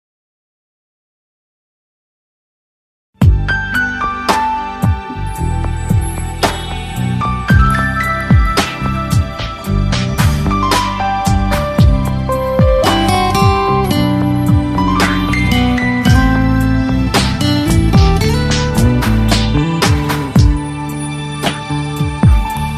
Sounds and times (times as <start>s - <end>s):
New-age music: 3.2s - 22.7s.